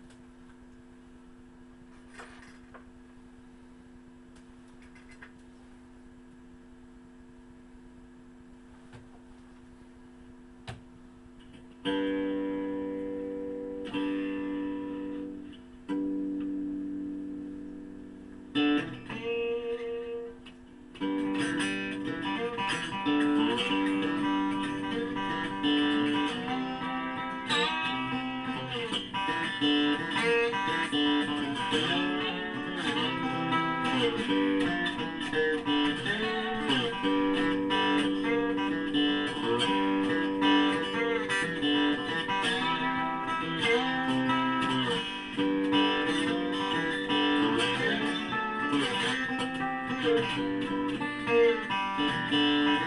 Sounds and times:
Steel guitar, slide guitar: 0:11.8 - 0:52.8.

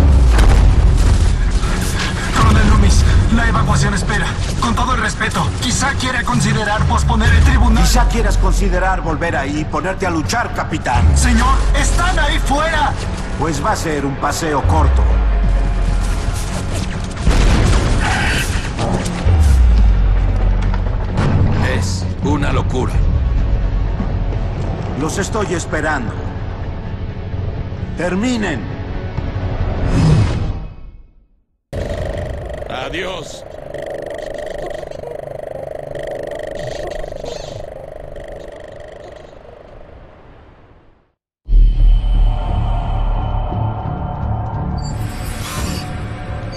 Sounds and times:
Speech: 0:02.3 - 0:15.1, 0:32.7 - 0:33.4.

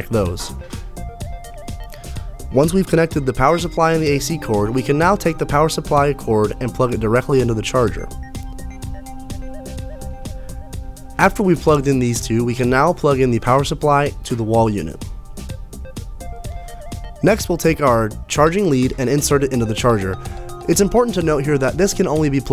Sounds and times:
Speech: 0:00.0 - 0:00.6, 0:02.5 - 0:08.1, 0:11.2 - 0:15.0, 0:17.2 - 0:22.5
Music: 0:00.0 - 0:22.5.

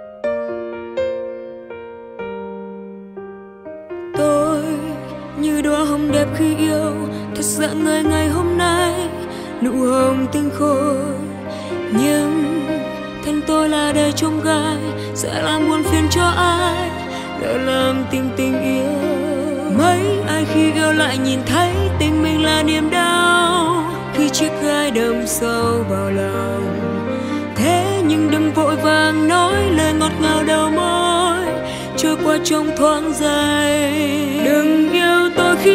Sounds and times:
Background music: 0:00.0 - 0:35.7
Happy music: 0:00.0 - 0:35.7.

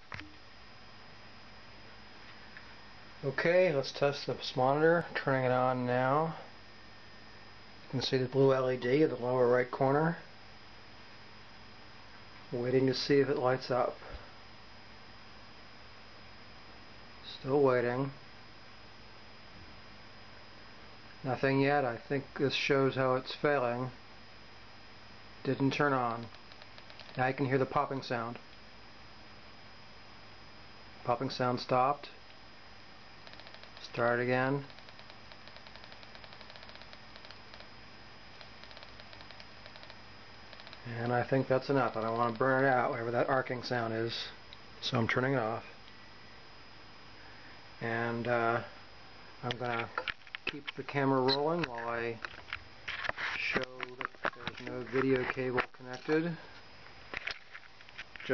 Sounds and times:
Speech: 0:03.2 - 0:06.5, 0:07.9 - 0:10.3, 0:12.5 - 0:14.1, 0:17.2 - 0:18.2, 0:21.2 - 0:24.0, 0:25.4 - 0:26.3, 0:27.2 - 0:28.4, 0:31.1 - 0:32.2, 0:33.8 - 0:34.7, 0:40.9 - 0:45.7, 0:47.8 - 0:48.7, 0:49.4 - 0:52.2, 0:53.4 - 0:56.5.

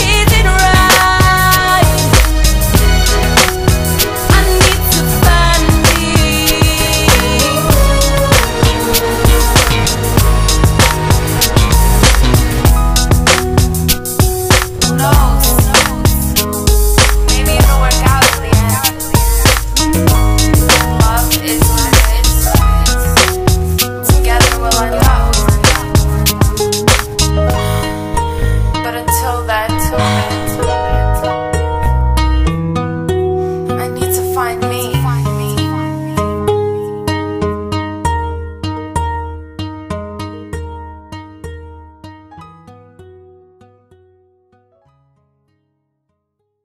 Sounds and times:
Music: 0:00.0 - 0:46.6.

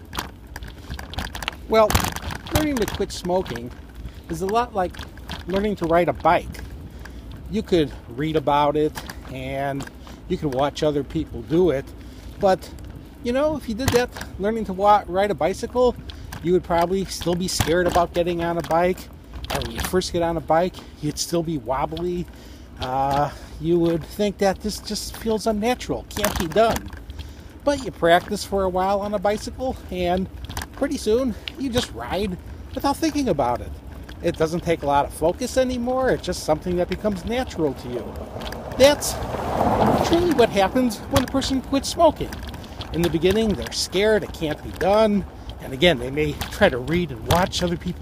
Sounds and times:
Bicycle: 0:00.0 - 0:48.0
Speech: 0:01.7 - 0:06.5, 0:07.5 - 0:26.9, 0:27.6 - 0:38.1, 0:38.8 - 0:39.2, 0:39.8 - 0:48.0.

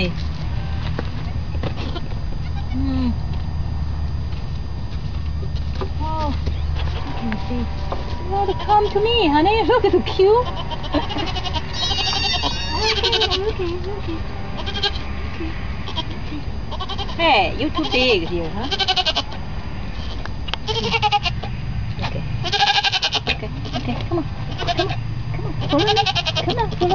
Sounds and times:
Goat: 0:01.2 - 0:03.4, 0:05.6 - 0:07.5, 0:10.0 - 0:17.2, 0:25.6 - 0:26.9
Speech: 0:17.2 - 0:18.7.

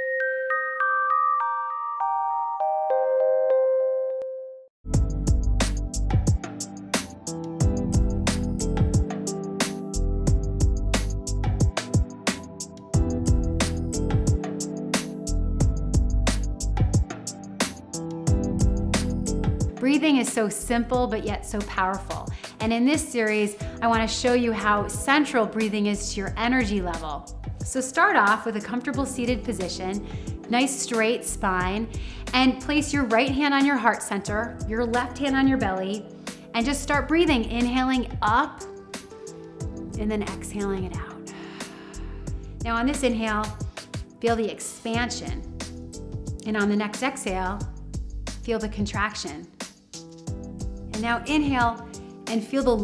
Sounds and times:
Music: 0:00.0 - 0:52.8
Speech: 0:19.8 - 0:36.0, 0:36.6 - 0:38.6, 0:40.0 - 0:41.2, 0:42.6 - 0:43.6, 0:44.2 - 0:45.4, 0:46.4 - 0:47.7, 0:48.5 - 0:49.5, 0:51.0 - 0:52.8.

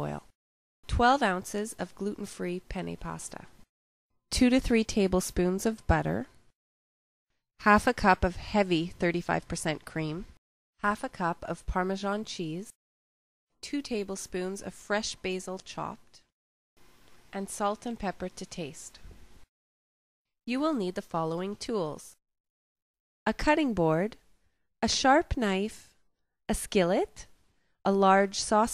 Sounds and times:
Speech: 0:00.0 - 0:00.3, 0:00.9 - 0:03.6, 0:04.3 - 0:06.4, 0:07.6 - 0:12.8, 0:13.6 - 0:16.2, 0:17.4 - 0:19.1, 0:20.5 - 0:22.2, 0:23.3 - 0:24.2, 0:24.8 - 0:25.9, 0:26.5 - 0:27.3, 0:27.9 - 0:28.7.

